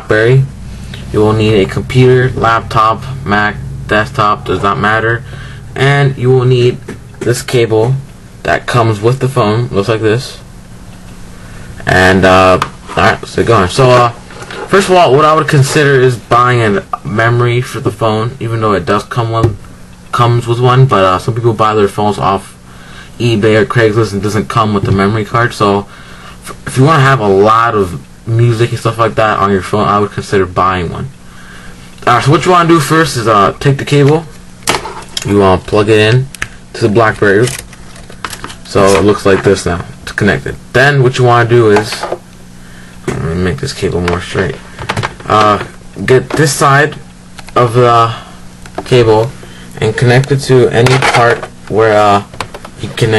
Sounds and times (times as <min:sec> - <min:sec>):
Speech: 0:00.0 - 0:10.4, 0:11.8 - 0:22.6, 0:23.2 - 0:31.2, 0:32.0 - 0:34.4, 0:35.2 - 0:37.6, 0:38.6 - 0:42.2, 0:43.0 - 0:44.6, 0:45.2 - 0:53.1.